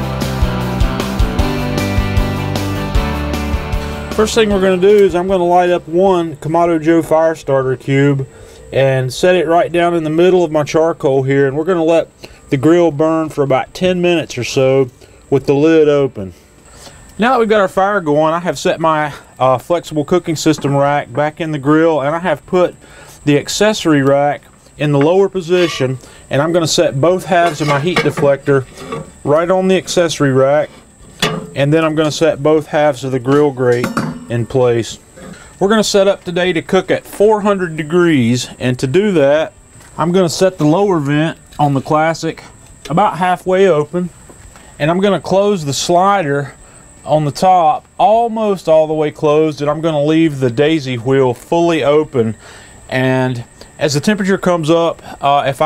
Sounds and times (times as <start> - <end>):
Speech: 4.2 - 16.4, 17.2 - 30.8, 31.6 - 35.0, 35.6 - 44.1, 44.8 - 55.6.